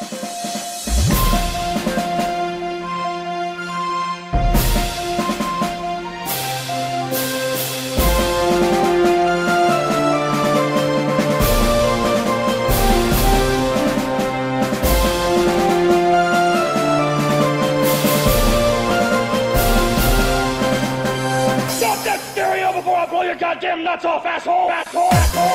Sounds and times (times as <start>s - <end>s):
Theme music: 0.0s - 23.6s, 24.8s - 25.5s.